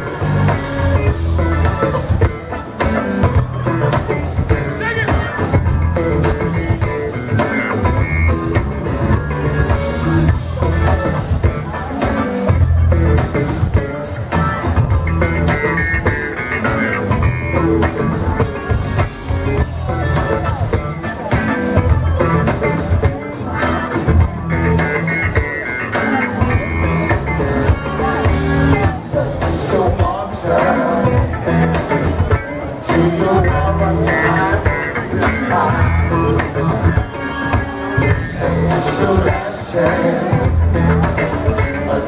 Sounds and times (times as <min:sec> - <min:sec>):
Rhythm and blues: 0:00.0 - 0:42.0.